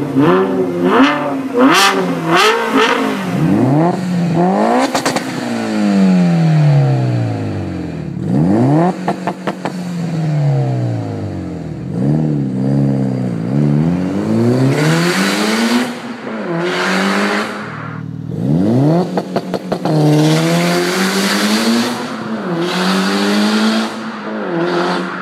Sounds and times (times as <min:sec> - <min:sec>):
Whoosh, swoosh, swish: 0:16.8 - 0:18.2.